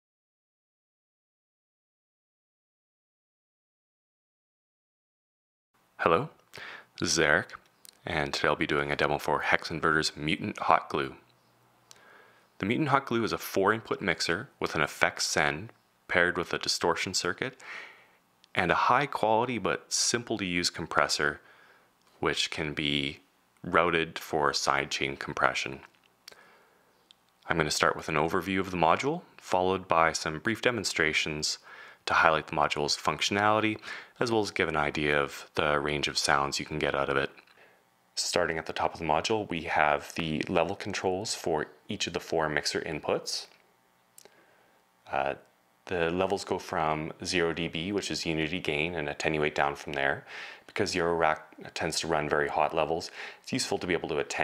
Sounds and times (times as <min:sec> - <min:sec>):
Speech: 0:06.0 - 0:06.4, 0:07.0 - 0:11.3, 0:12.6 - 0:17.6, 0:18.5 - 0:21.4, 0:22.2 - 0:25.9, 0:27.4 - 0:37.4, 0:38.2 - 0:43.6, 0:45.1 - 0:54.4.